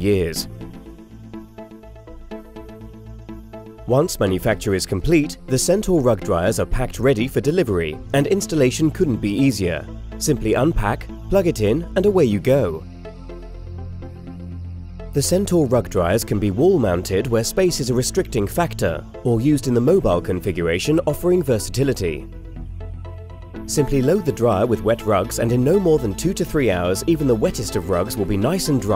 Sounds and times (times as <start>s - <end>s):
Speech: 0.0s - 0.5s, 3.9s - 12.8s, 15.2s - 22.2s, 23.7s - 28.9s
Music: 0.0s - 28.9s.